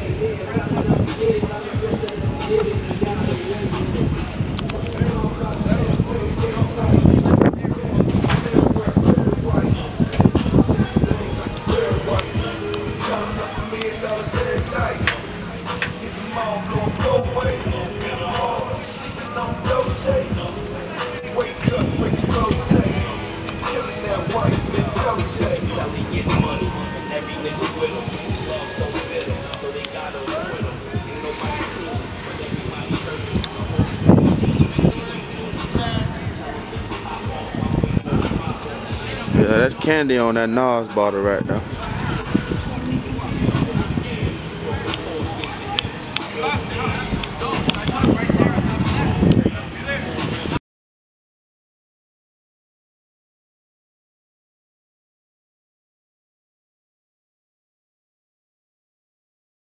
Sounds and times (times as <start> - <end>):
Music: 0.0 - 50.6.